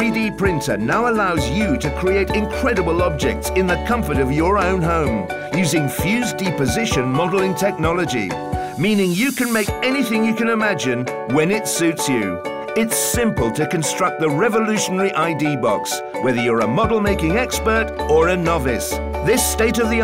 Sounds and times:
Music: 0.0s - 20.0s
Speech: 0.0s - 20.0s.

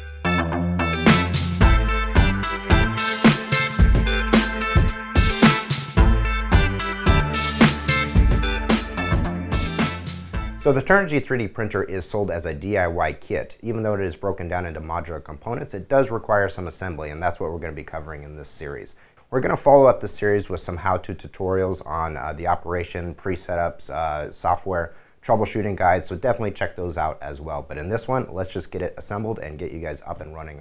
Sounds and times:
Music: 0.0s - 10.9s
Speech: 10.6s - 30.6s.

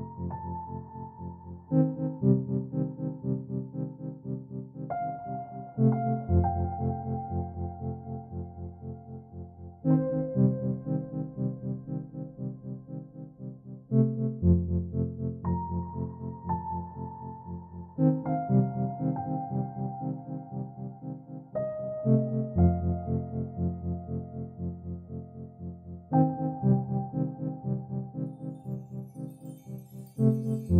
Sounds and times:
Ambient music: 0.0s - 30.7s.

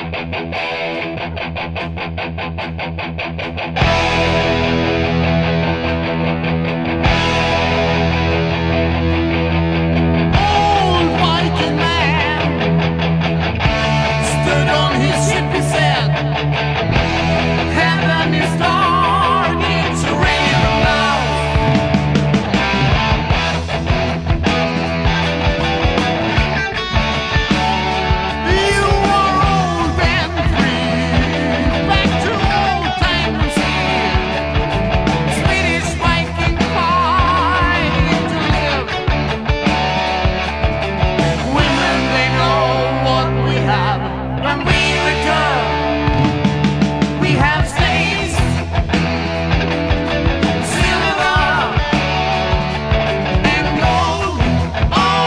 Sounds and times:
Music: 0.0s - 55.2s.

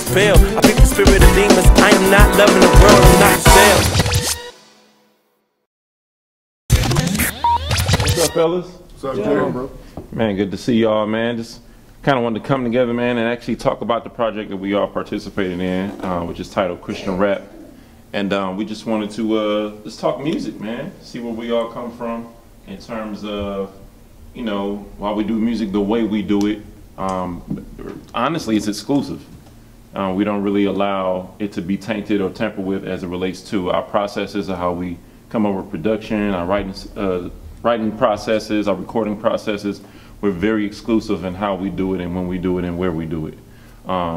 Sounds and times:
Speech: 8.2s - 23.8s, 24.4s - 29.3s, 29.9s - 44.1s.

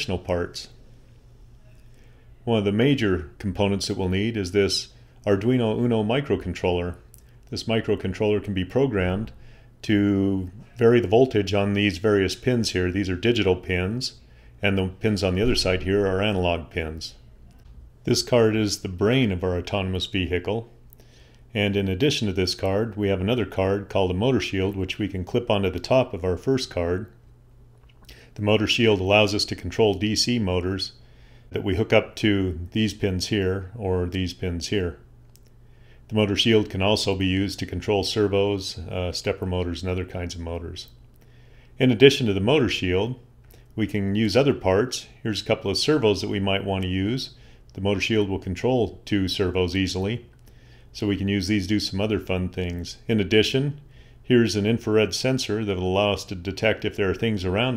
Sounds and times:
Speech: 0.0s - 0.8s, 1.6s - 17.3s, 18.0s - 20.8s, 21.5s - 27.2s, 28.4s - 35.1s, 36.1s - 41.0s, 41.8s - 50.3s, 50.9s - 57.7s.

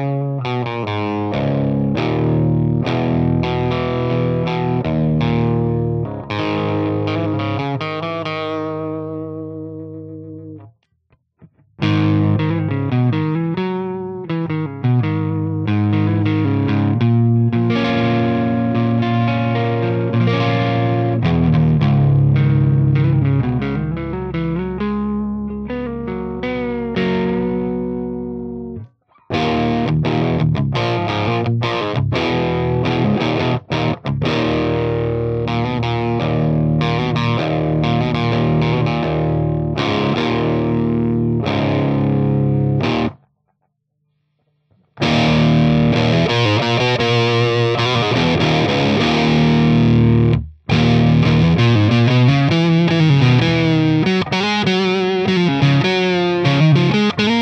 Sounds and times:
Music: 0.0s - 43.3s, 44.0s - 57.4s
Distortion: 0.0s - 57.4s.

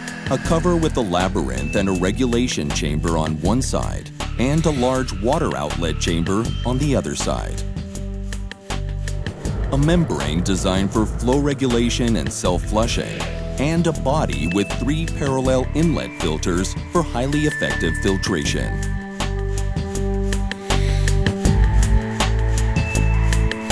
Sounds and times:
Music: 0.0s - 23.7s
Speech: 0.3s - 7.7s, 9.7s - 18.8s.

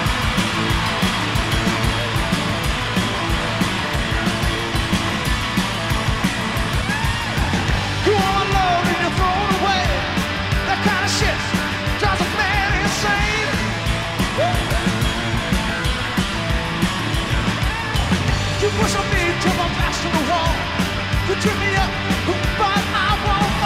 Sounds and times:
Music: 0.0s - 23.6s.

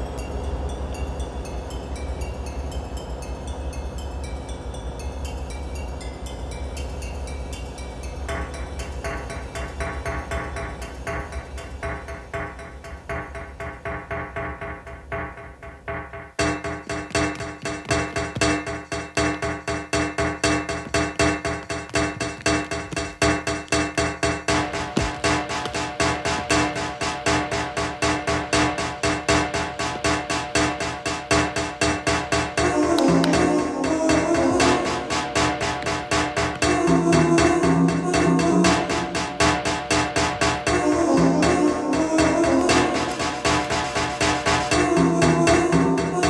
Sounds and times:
Soundtrack music: 0.0s - 46.3s.

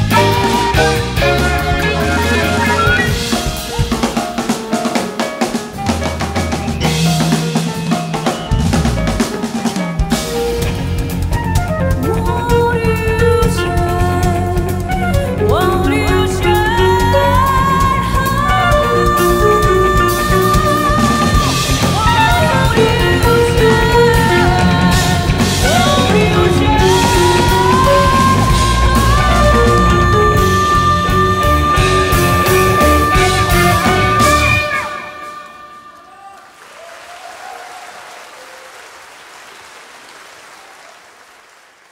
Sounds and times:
Bowed string instrument: 0.0s - 4.5s, 10.2s - 36.0s
Drum: 0.0s - 35.0s
Psychedelic rock: 0.0s - 35.8s
Guitar: 0.0s - 35.9s
Jazz: 0.0s - 36.0s
Singing: 15.5s - 36.5s.

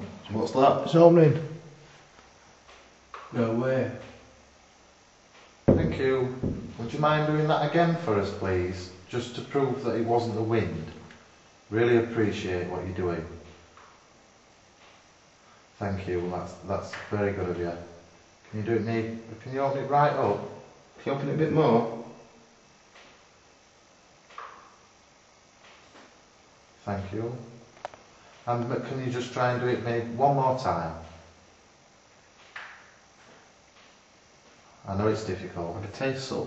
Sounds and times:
Speech: 0.0s - 1.6s, 3.3s - 4.2s, 5.7s - 11.1s, 11.7s - 13.5s, 15.8s - 22.2s, 26.8s - 27.6s, 28.4s - 31.3s, 34.8s - 36.4s.

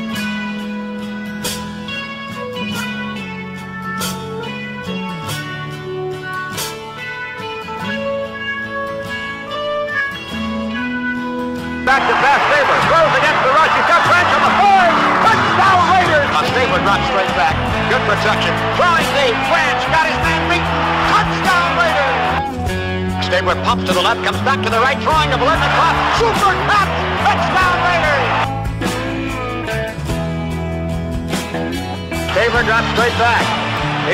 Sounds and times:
Music: 0.0s - 34.1s
Speech: 11.9s - 22.3s, 23.2s - 28.4s, 32.3s - 33.5s.

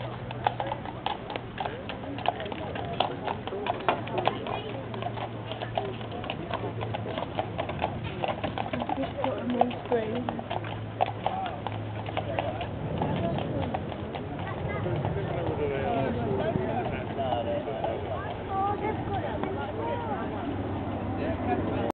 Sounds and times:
Clip-clop: 0.0s - 21.9s
Speech: 0.5s - 7.4s, 12.2s - 21.9s.

